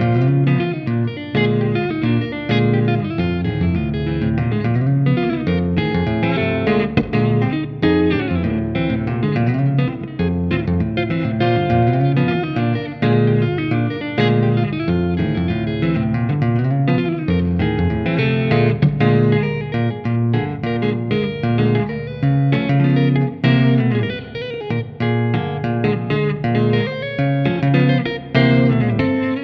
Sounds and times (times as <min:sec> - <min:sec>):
Guitar: 0:00.0 - 0:29.4.